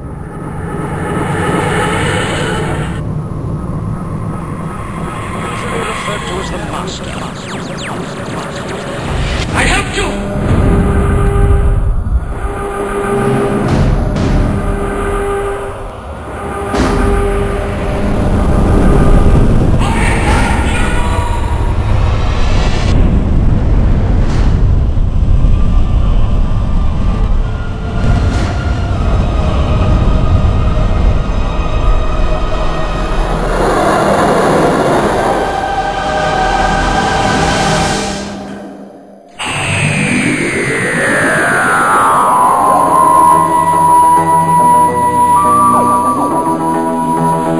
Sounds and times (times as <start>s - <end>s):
Music: 0.0s - 47.5s
Speech: 5.4s - 10.3s, 19.8s - 21.4s.